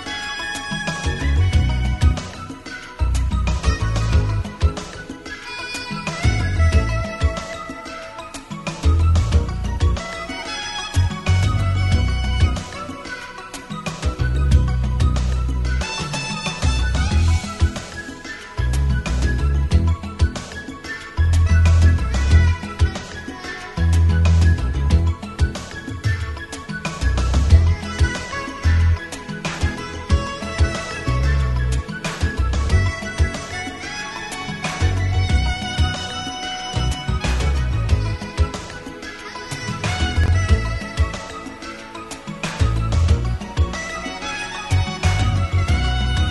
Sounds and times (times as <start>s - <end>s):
Music: 0.0s - 46.3s.